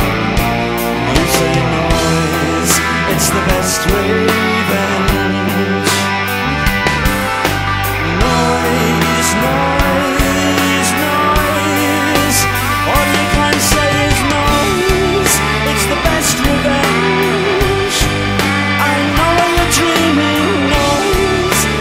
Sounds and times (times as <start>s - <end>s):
Music: 0.0s - 21.8s.